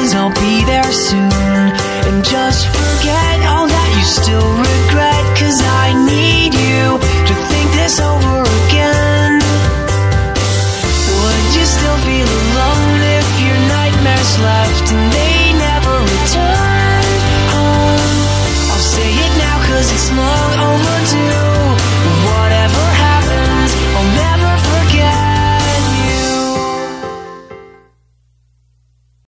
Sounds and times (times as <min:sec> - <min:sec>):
Music: 0:00.0 - 0:28.4.